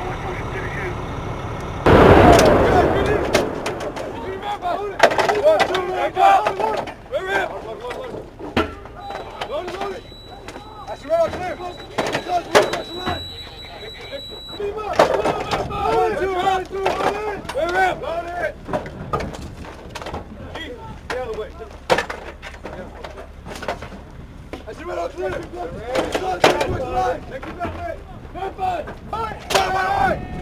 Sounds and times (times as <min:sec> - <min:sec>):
Speech: 0:00.0 - 0:01.0, 0:04.1 - 0:08.3, 0:09.0 - 0:18.6, 0:20.4 - 0:21.9, 0:24.6 - 0:30.4.